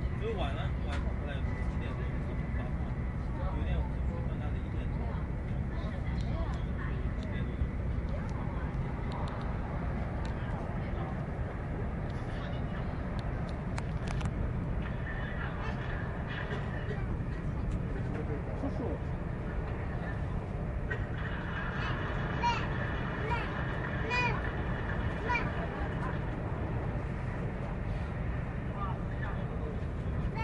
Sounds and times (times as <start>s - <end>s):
Speech: 0.0s - 9.4s.